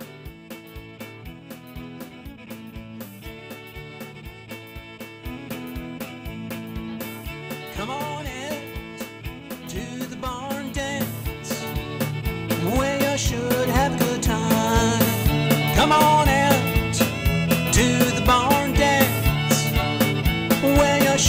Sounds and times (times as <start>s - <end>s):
Bluegrass: 0.0s - 21.2s.